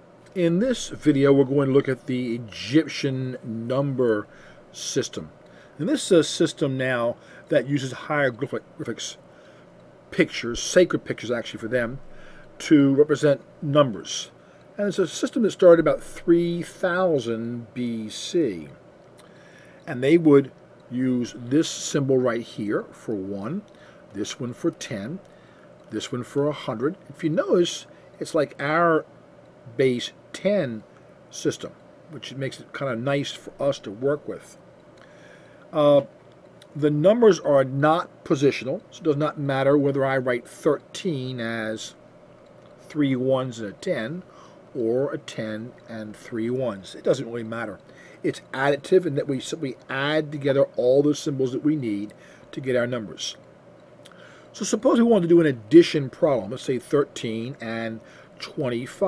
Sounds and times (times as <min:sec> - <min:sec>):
Speech: 0:00.4 - 0:09.2, 0:10.1 - 0:12.0, 0:12.6 - 0:18.8, 0:19.9 - 0:25.2, 0:25.9 - 0:29.1, 0:29.7 - 0:34.6, 0:35.8 - 0:42.0, 0:42.9 - 0:53.4, 0:54.5 - 0:59.0.